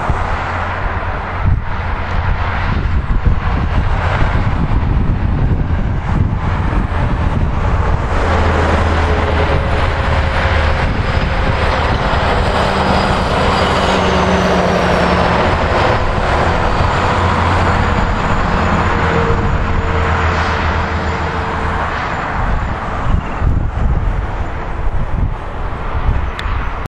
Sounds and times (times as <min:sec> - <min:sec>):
Vehicle: 0:00.0 - 0:26.9.